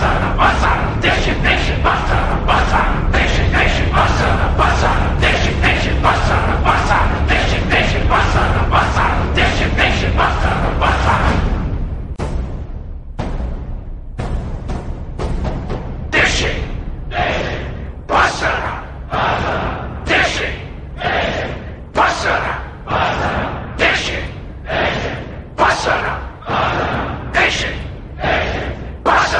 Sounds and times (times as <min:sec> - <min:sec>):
Music: 0:00.0 - 0:29.4.